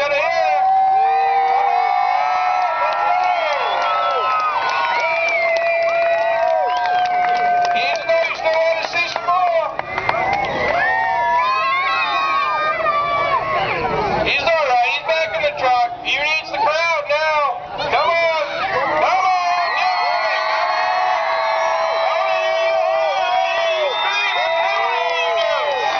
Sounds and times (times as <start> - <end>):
Speech: 0.0 - 0.7, 7.7 - 9.8, 13.6 - 20.1.